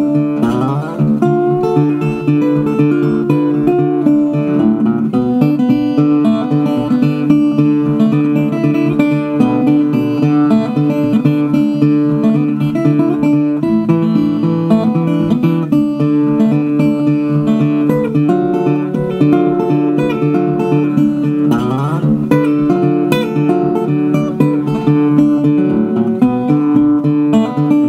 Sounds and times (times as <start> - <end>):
Acoustic guitar: 0.0 - 27.8
Strum: 0.0 - 27.8.